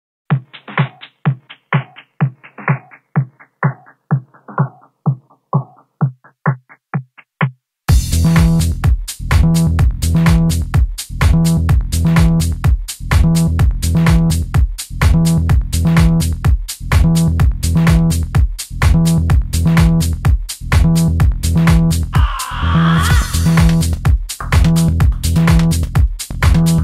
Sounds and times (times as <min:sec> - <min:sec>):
Drum machine: 0:00.3 - 0:26.8.